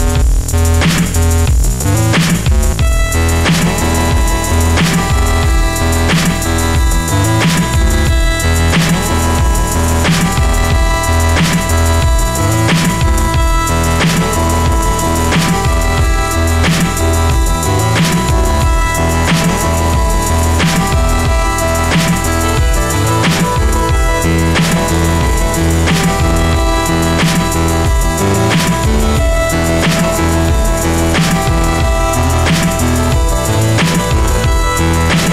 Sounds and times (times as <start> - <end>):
Dubstep: 0.0 - 35.3.